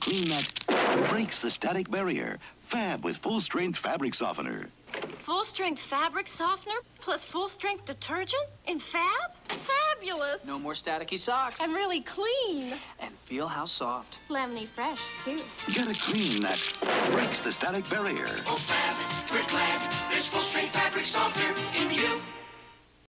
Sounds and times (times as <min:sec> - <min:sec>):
Music: 0:13.4 - 0:22.9.